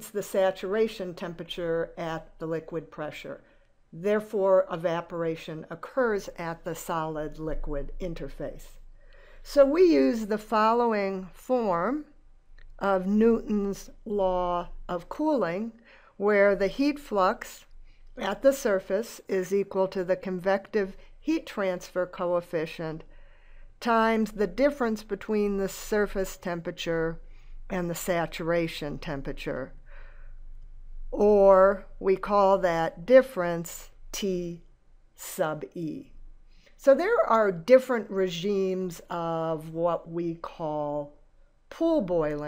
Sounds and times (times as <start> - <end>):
Speech: 0.0 - 3.4, 4.0 - 8.8, 9.5 - 12.1, 12.8 - 23.0, 23.8 - 29.7, 31.2 - 34.6, 35.2 - 36.1, 36.8 - 41.1, 41.7 - 42.4.